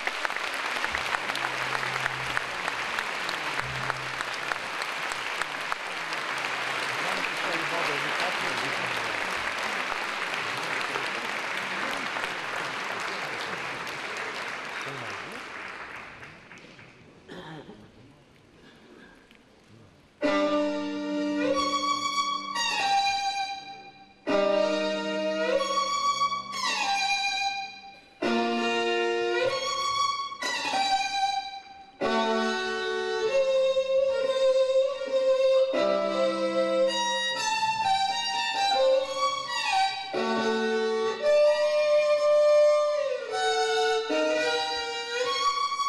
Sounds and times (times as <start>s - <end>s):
Classical music: 0.0s - 14.5s, 20.2s - 45.8s
String section: 0.0s - 16.7s, 20.2s - 45.8s
Violin, fiddle: 20.2s - 45.8s.